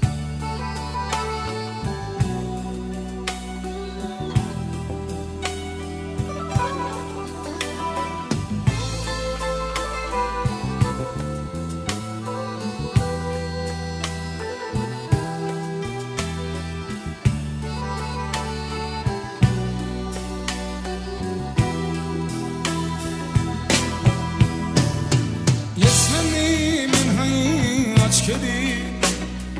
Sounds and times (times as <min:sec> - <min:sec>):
Music: 0:00.0 - 0:29.6.